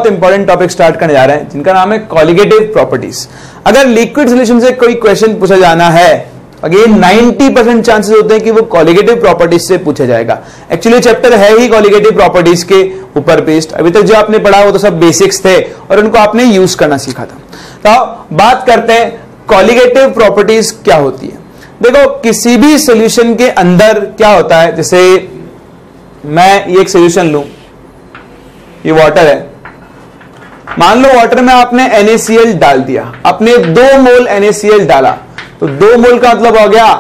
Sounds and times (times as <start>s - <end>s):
Speech: 0.0s - 25.5s, 26.2s - 27.6s, 28.8s - 29.6s, 30.8s - 37.0s.